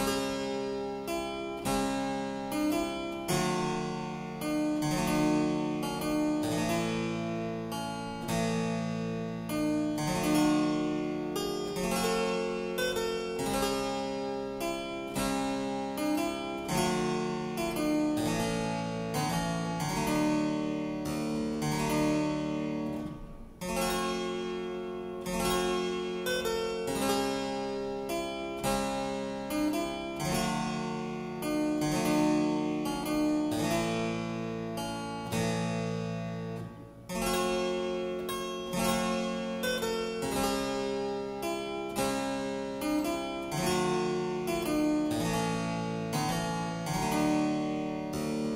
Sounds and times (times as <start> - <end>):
Harpsichord: 0.0 - 48.5.